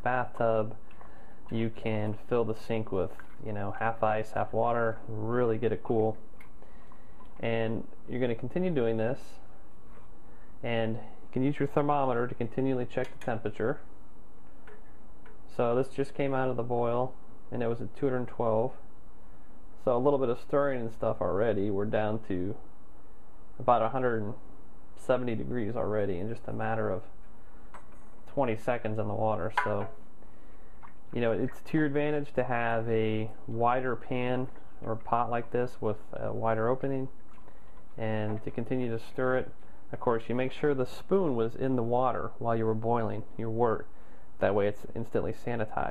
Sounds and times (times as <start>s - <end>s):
Speech: 0.0s - 0.8s, 1.5s - 6.2s, 7.4s - 9.5s, 10.6s - 13.9s, 15.5s - 18.8s, 19.8s - 22.6s, 23.6s - 24.4s, 25.0s - 27.2s, 28.3s - 30.0s, 31.1s - 37.2s, 38.0s - 45.9s.